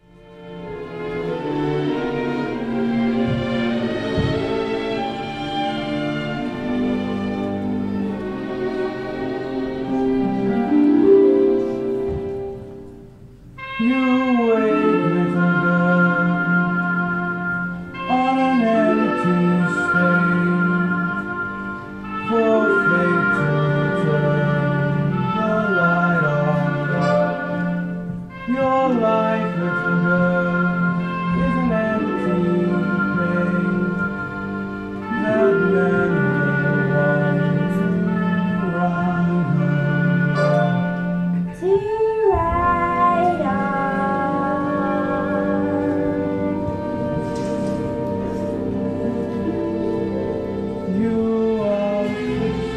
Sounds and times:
Sad music: 0.0s - 52.7s.

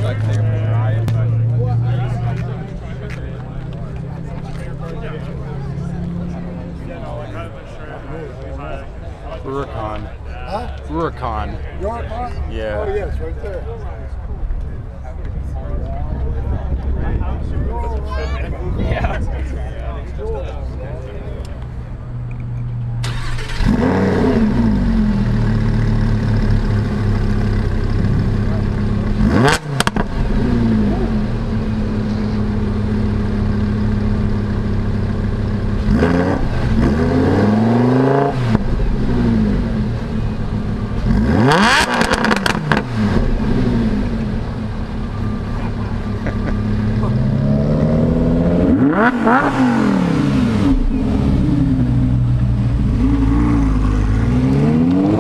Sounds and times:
Car: 0.0s - 55.2s.

